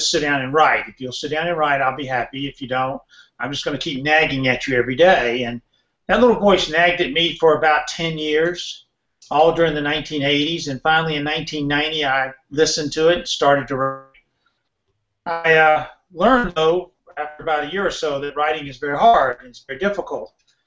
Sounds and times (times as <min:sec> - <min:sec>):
Speech: 0:00.0 - 0:14.2, 0:15.3 - 0:20.3.